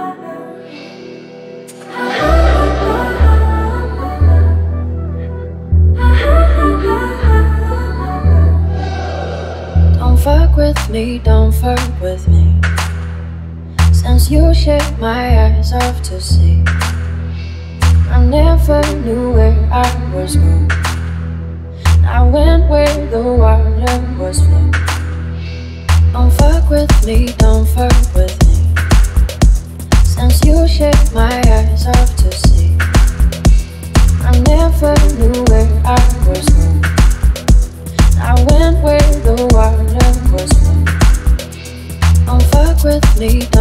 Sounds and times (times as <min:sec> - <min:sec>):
Music: 0:00.0 - 0:43.6.